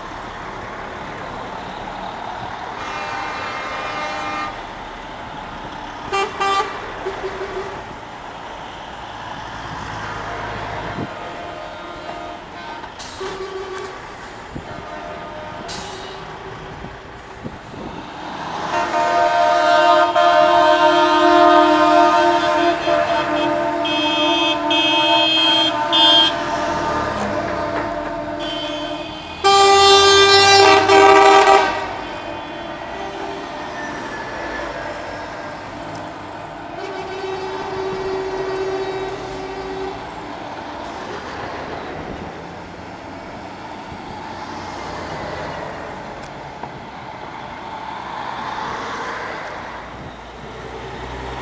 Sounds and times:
Truck: 0:00.0 - 0:51.4.

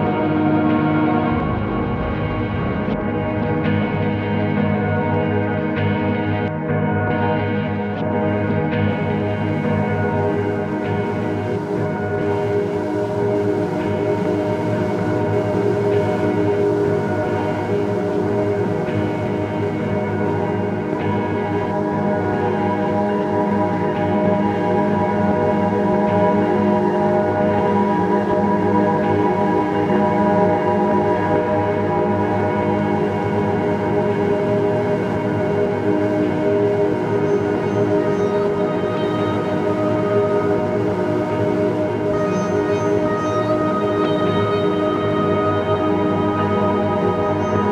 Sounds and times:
Ambient music: 0:00.0 - 0:47.7.

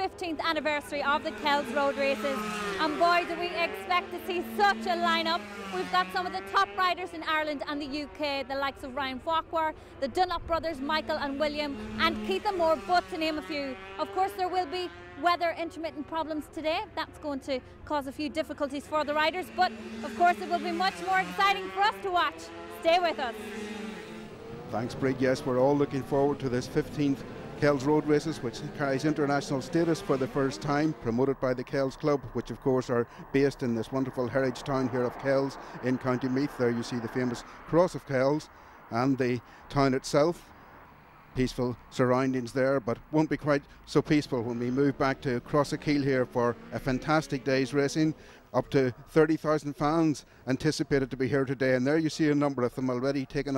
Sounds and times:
Motorcycle: 0:00.0 - 0:53.5
Race car, auto racing: 0:00.0 - 0:53.5.

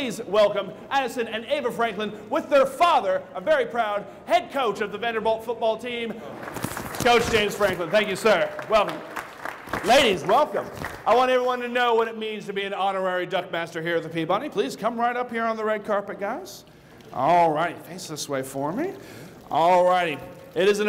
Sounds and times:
Speech: 0:00.0 - 0:06.2, 0:09.9 - 0:16.6, 0:17.2 - 0:20.8.

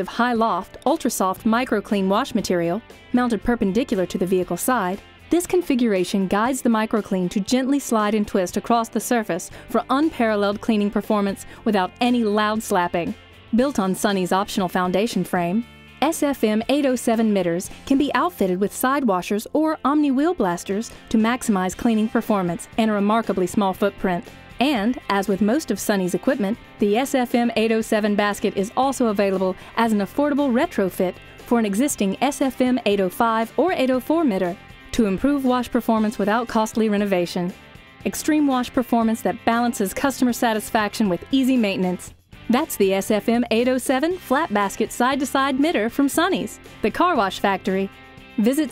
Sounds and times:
Music: 0:00.0 - 0:48.7
Speech: 0:00.0 - 0:48.7.

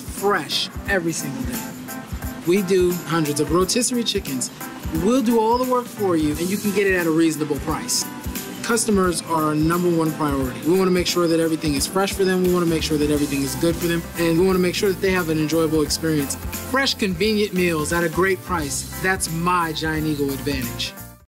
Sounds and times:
Speech: 0:00.0 - 0:01.7, 0:02.4 - 0:21.0
Music: 0:00.0 - 0:21.3.

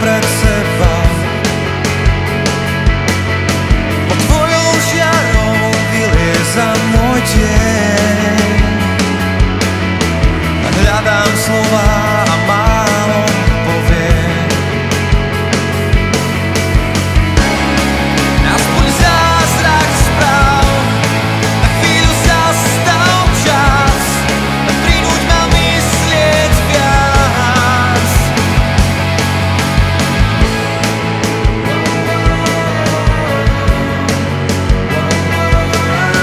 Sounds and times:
Exciting music: 0:00.0 - 0:36.2.

